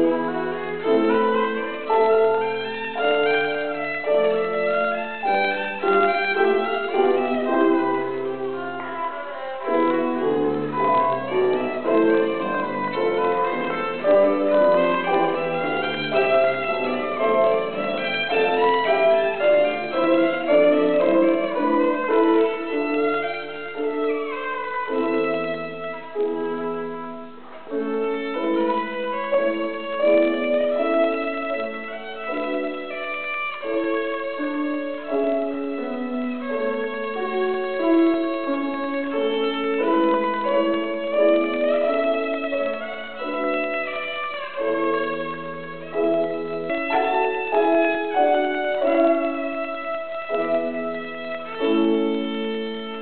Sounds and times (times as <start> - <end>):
Violin, fiddle: 0.0 - 53.0.